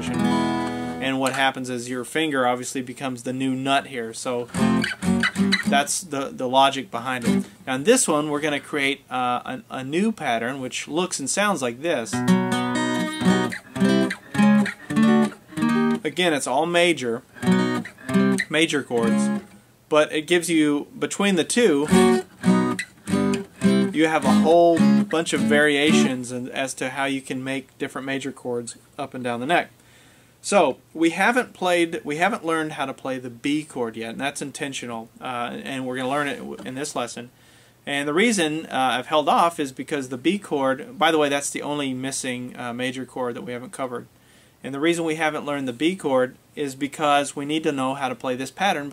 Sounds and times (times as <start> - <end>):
Speech: 0.0 - 0.3, 1.0 - 4.5, 5.7 - 12.2, 16.0 - 17.3, 18.5 - 21.9, 23.9 - 29.7, 30.4 - 37.3, 37.9 - 48.9
Strum: 0.0 - 1.5, 4.5 - 5.9, 12.1 - 16.1, 17.2 - 19.6, 21.8 - 26.2
Acoustic guitar: 0.0 - 1.6, 2.6 - 8.7, 11.2 - 19.8, 21.1 - 26.8.